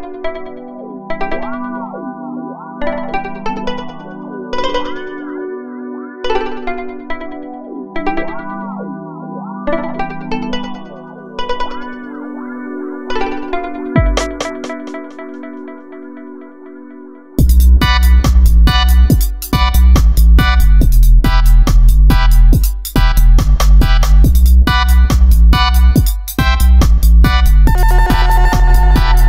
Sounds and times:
Music: 0:00.0 - 0:29.2.

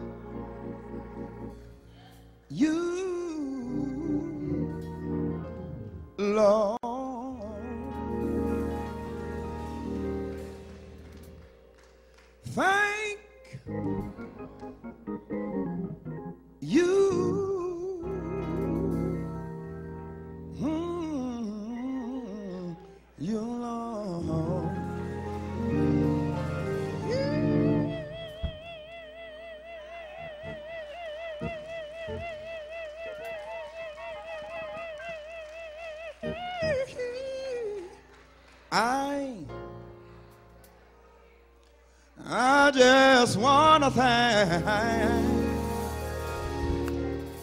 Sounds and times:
Music: 0:00.0 - 0:47.4
Male singing: 0:02.5 - 0:04.8, 0:06.2 - 0:08.1, 0:12.5 - 0:13.3, 0:16.6 - 0:18.6, 0:20.6 - 0:25.3, 0:27.0 - 0:28.4, 0:32.0 - 0:38.0, 0:38.7 - 0:39.5, 0:42.2 - 0:45.6.

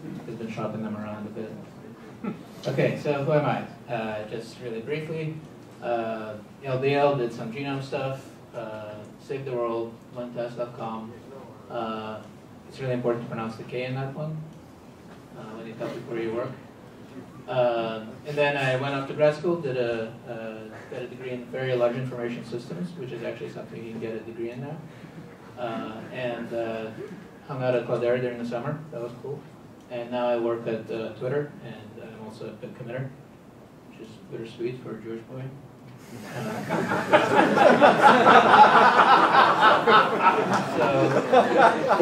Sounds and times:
Speech: 0:00.0 - 0:02.0, 0:02.6 - 0:14.5, 0:15.4 - 0:16.6, 0:17.4 - 0:24.9, 0:25.6 - 0:33.2, 0:33.9 - 0:35.6, 0:40.4 - 0:42.0.

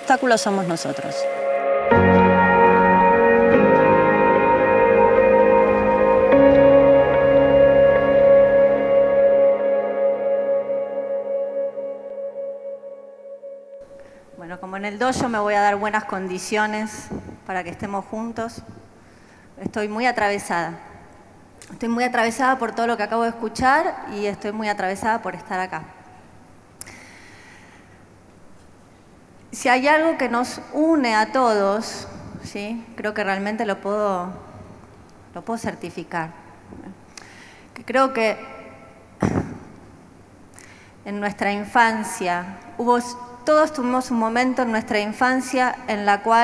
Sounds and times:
Female speech, woman speaking: 0:00.0 - 0:01.3, 0:14.4 - 0:18.7, 0:19.6 - 0:20.8, 0:21.7 - 0:25.9, 0:29.6 - 0:34.4, 0:35.4 - 0:37.0, 0:37.8 - 0:38.6, 0:41.1 - 0:46.4
Ambient music: 0:00.0 - 0:14.4.

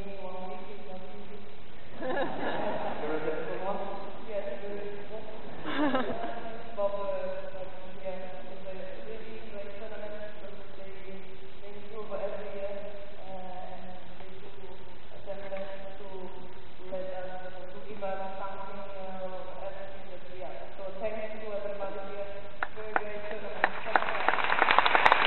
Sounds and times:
Male speech, man speaking: 0:00.0 - 0:01.5, 0:03.0 - 0:24.3
Narration, monologue: 0:00.0 - 0:24.5.

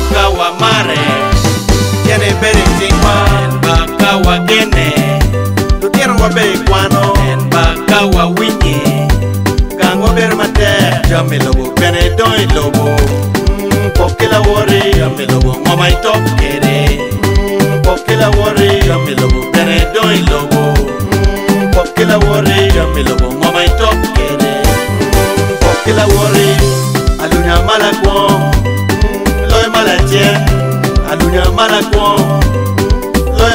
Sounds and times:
Dance music: 0:00.0 - 0:33.5.

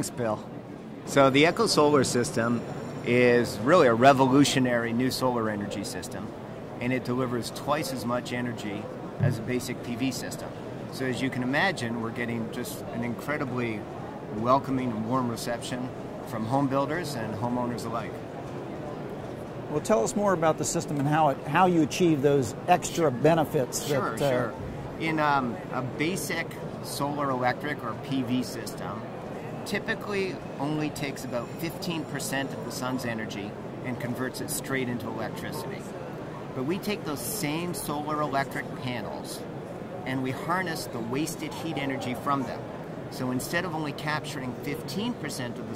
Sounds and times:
Speech: 0:00.0 - 0:00.5, 0:01.1 - 0:18.2, 0:19.7 - 0:29.1, 0:29.7 - 0:35.9, 0:36.6 - 0:39.4, 0:40.0 - 0:45.7.

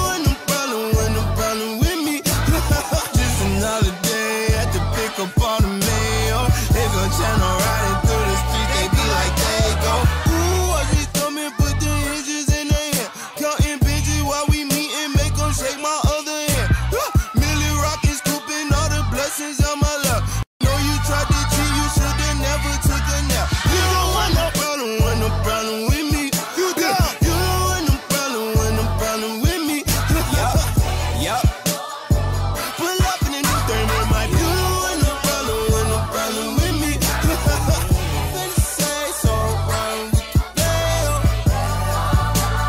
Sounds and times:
Music: 0:00.0 - 0:42.6.

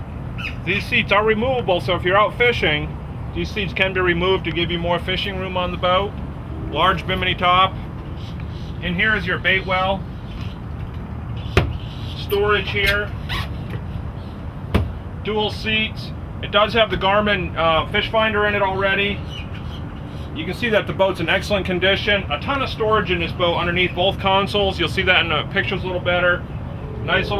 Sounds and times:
Boat, Water vehicle: 0:00.0 - 0:27.3
Speech: 0:00.6 - 0:06.1, 0:06.7 - 0:07.7, 0:08.8 - 0:10.0, 0:12.2 - 0:13.1, 0:15.2 - 0:19.2, 0:20.4 - 0:26.4, 0:27.0 - 0:27.3.

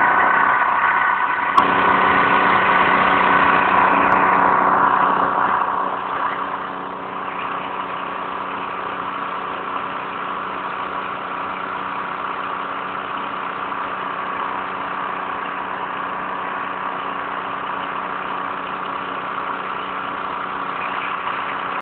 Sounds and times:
Vehicle: 0:00.0 - 0:21.8.

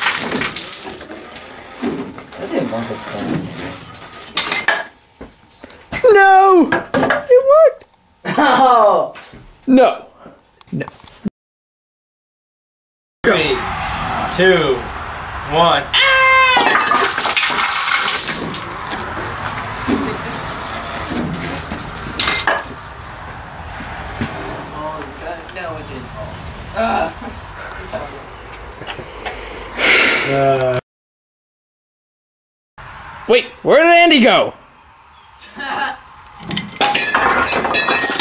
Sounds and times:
Speech: 0:13.3 - 0:13.6, 0:14.4 - 0:14.9, 0:15.5 - 0:16.0, 0:33.3 - 0:34.6.

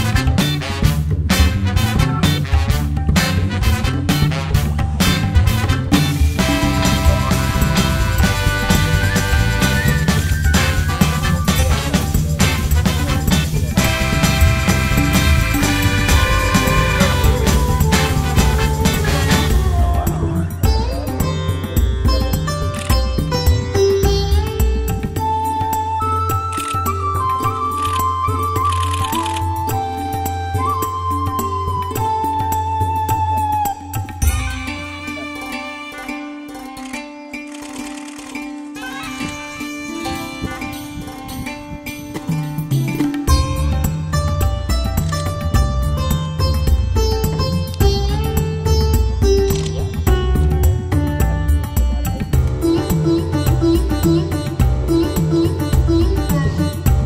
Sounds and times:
Music: 0:00.0 - 0:57.0.

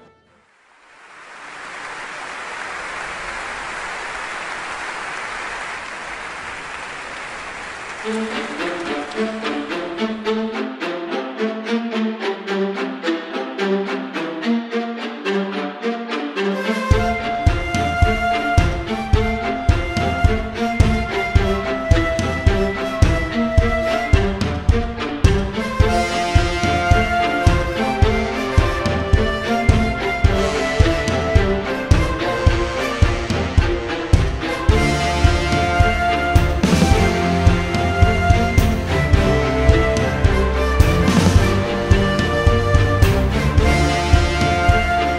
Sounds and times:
Music: 0:00.0 - 0:00.6, 0:06.9 - 0:45.1.

